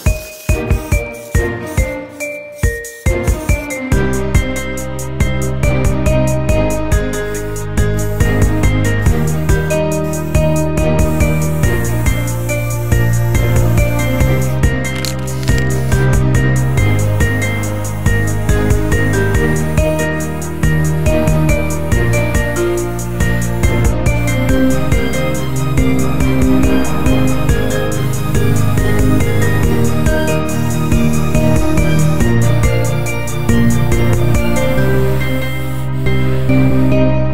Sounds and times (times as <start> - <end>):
Music: 0.0 - 37.3.